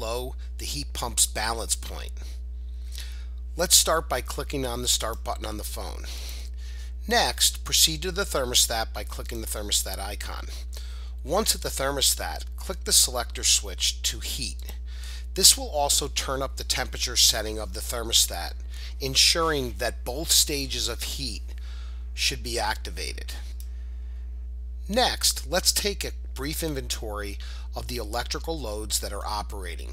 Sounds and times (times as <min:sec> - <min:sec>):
Speech: 0:00.0 - 0:02.4, 0:03.6 - 0:06.4, 0:07.0 - 0:14.8, 0:15.4 - 0:21.6, 0:22.2 - 0:23.6, 0:24.9 - 0:29.9.